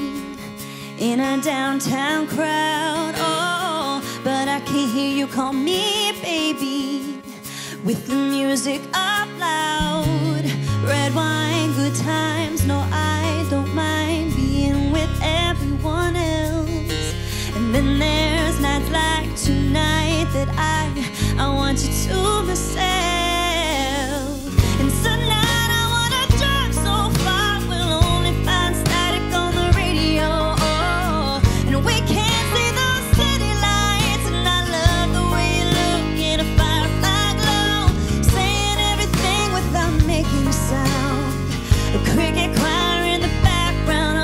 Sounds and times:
Music: 0.0s - 44.2s.

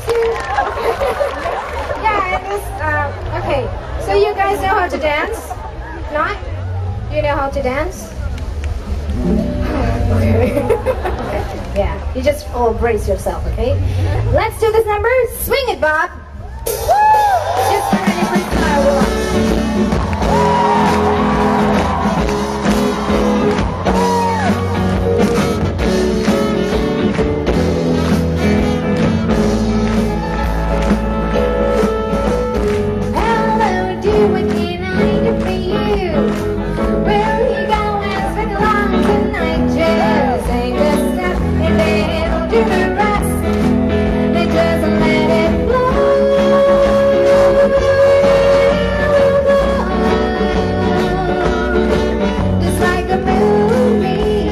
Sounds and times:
Outside, urban or manmade: 0.0s - 54.5s
Music: 6.6s - 54.5s
Singing: 33.1s - 43.5s.

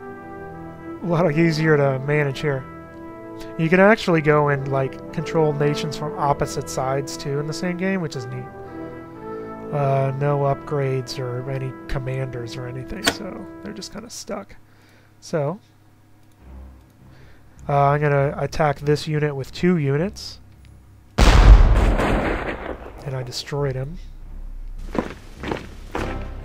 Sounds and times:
Speech: 1.0s - 2.7s, 3.5s - 8.5s, 9.7s - 14.6s, 15.2s - 15.7s, 17.6s - 20.4s, 23.0s - 24.1s.

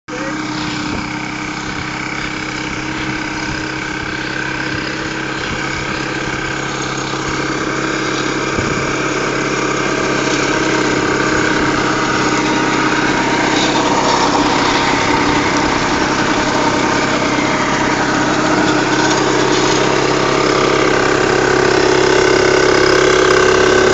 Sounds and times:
Vehicle: 0.0s - 23.9s
Lawn mower: 0.1s - 23.9s.

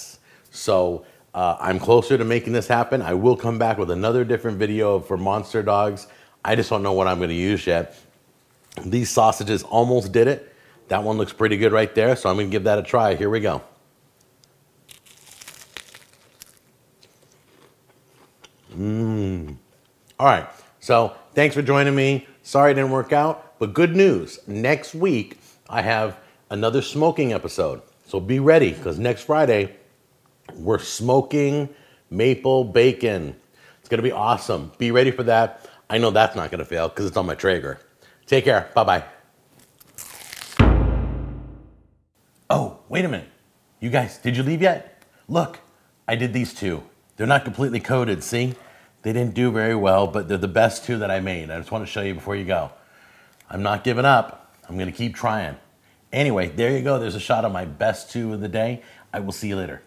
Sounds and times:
Speech: 0.0s - 8.1s, 8.8s - 13.8s, 18.7s - 19.6s, 20.2s - 29.8s, 30.5s - 39.2s, 42.5s - 52.8s, 53.5s - 59.8s
Inside, small room: 0.0s - 59.8s
Chewing, mastication: 14.3s - 20.2s.

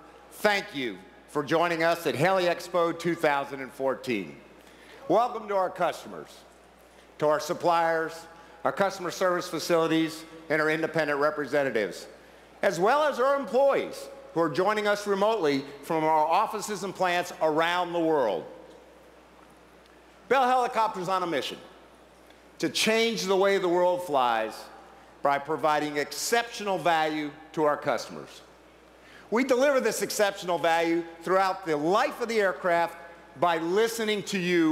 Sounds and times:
Speech: 0.3s - 6.5s, 7.2s - 18.6s, 20.3s - 21.7s, 22.6s - 28.5s, 29.3s - 34.7s.

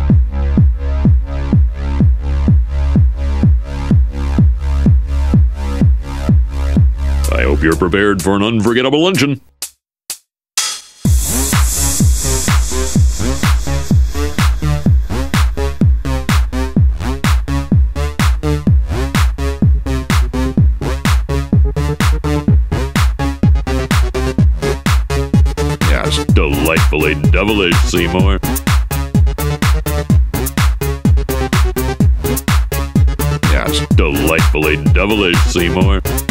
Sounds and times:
Techno: 0.1s - 8.4s, 11.1s - 36.3s
Speech: 7.3s - 9.4s, 25.8s - 28.4s, 33.4s - 36.1s.

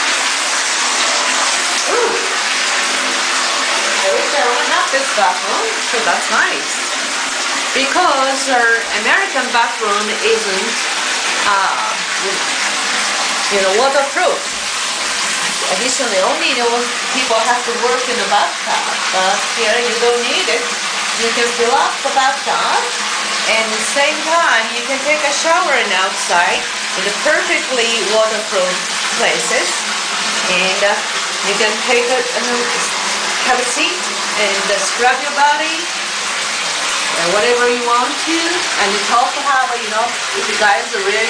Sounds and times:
Speech: 4.0s - 6.8s, 7.8s - 10.8s, 11.4s - 12.4s, 13.5s - 14.5s, 15.6s - 29.8s, 30.5s - 35.9s, 37.1s - 41.2s.

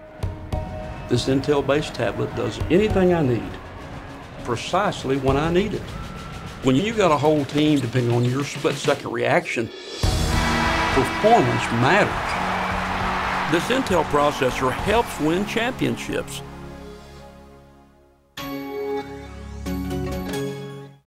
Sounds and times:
Music: 0.0s - 21.0s
Speech: 1.1s - 3.6s, 4.5s - 5.8s, 6.6s - 9.8s, 11.0s - 12.2s, 13.5s - 16.4s.

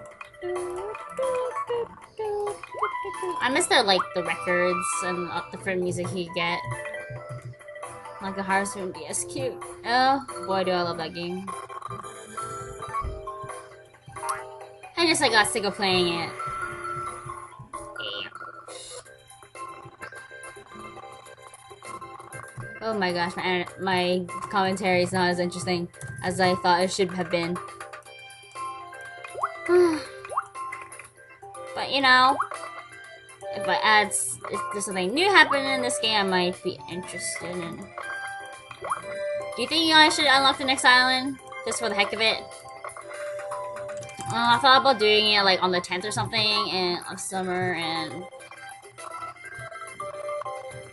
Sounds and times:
Music: 0.0s - 50.9s
Speech: 0.5s - 6.6s, 8.2s - 11.5s, 15.0s - 16.4s, 18.0s - 19.0s, 22.8s - 27.6s, 31.8s - 32.4s, 33.6s - 37.9s, 39.6s - 42.4s, 44.3s - 48.2s.

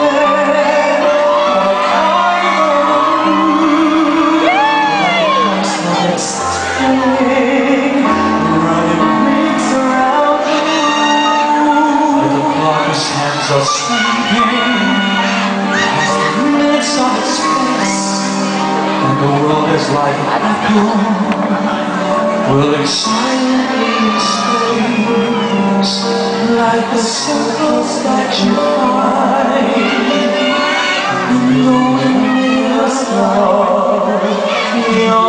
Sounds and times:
Tender music: 0.0s - 35.2s.

